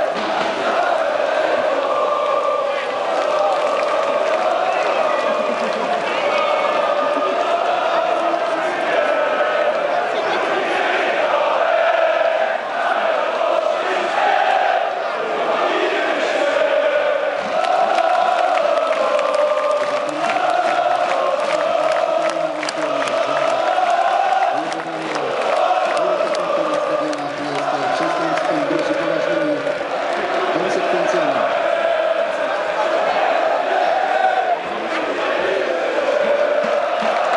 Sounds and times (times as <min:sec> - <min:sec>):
Speech: 0:06.4 - 0:10.9, 0:22.0 - 0:29.7, 0:30.4 - 0:31.6.